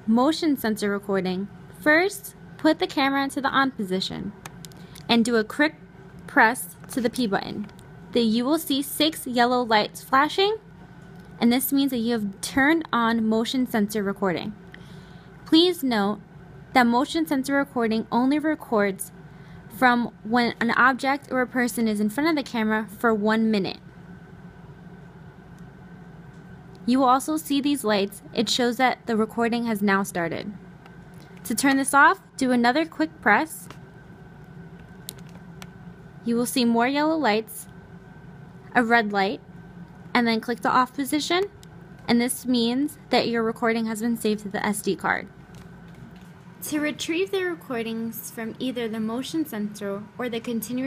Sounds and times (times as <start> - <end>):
Speech: 0.0 - 4.4, 5.1 - 10.6, 11.4 - 14.6, 15.5 - 23.8, 26.8 - 30.6, 31.5 - 33.8, 36.2 - 37.7, 38.7 - 39.4, 40.2 - 41.5, 42.1 - 45.3, 46.6 - 50.8.